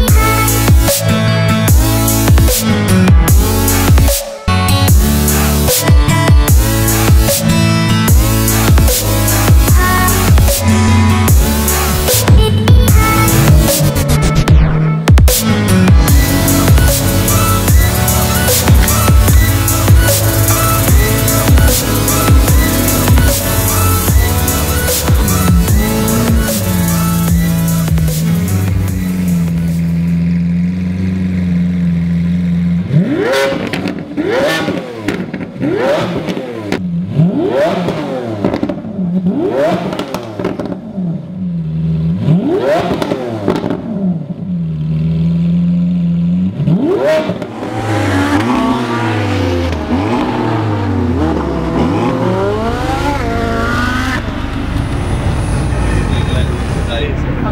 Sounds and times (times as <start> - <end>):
Race car, auto racing: 0.0 - 57.5.